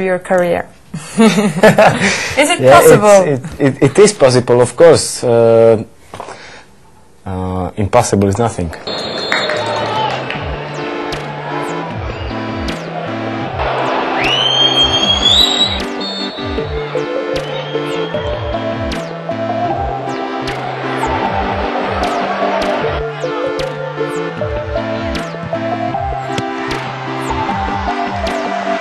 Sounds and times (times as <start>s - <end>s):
Music: 8.9s - 28.8s.